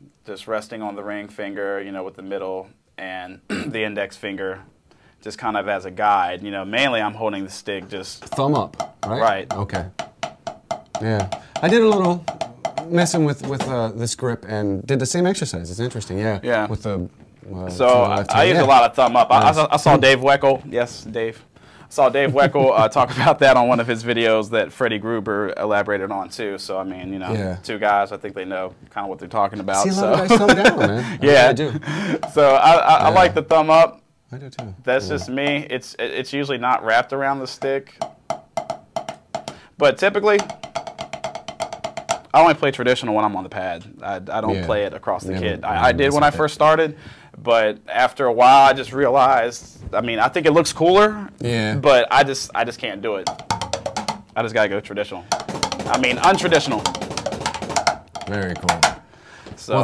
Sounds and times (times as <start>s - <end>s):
Inside, small room: 0.0s - 59.8s
Speech: 0.2s - 9.9s, 11.0s - 12.2s, 12.8s - 37.9s, 42.4s - 53.3s, 55.9s - 56.9s, 58.3s - 58.8s, 59.6s - 59.8s
Drum roll: 8.1s - 14.1s, 17.8s - 20.7s, 32.1s - 33.5s, 38.0s - 43.3s, 53.2s - 54.6s, 55.2s - 59.0s.